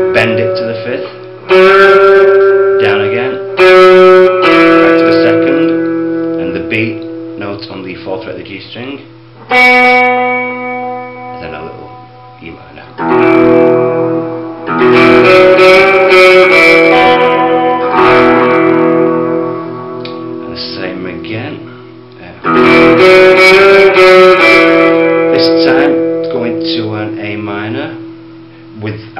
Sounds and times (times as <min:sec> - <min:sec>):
Guitar: 0:00.0 - 0:29.1
Inside, small room: 0:00.0 - 0:29.1
Speech: 0:00.2 - 0:01.1, 0:02.8 - 0:03.4, 0:05.0 - 0:05.8, 0:06.4 - 0:09.1, 0:11.4 - 0:13.4, 0:20.4 - 0:22.5, 0:25.3 - 0:28.1, 0:28.8 - 0:29.1.